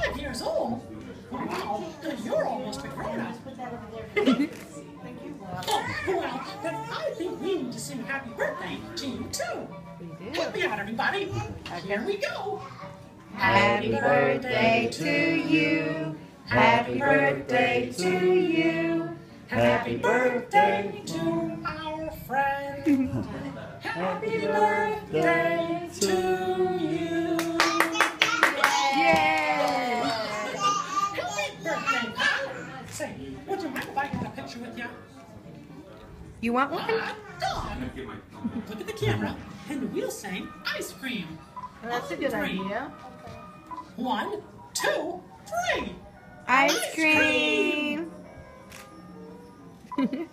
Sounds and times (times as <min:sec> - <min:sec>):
Music: 0:00.0 - 0:50.3.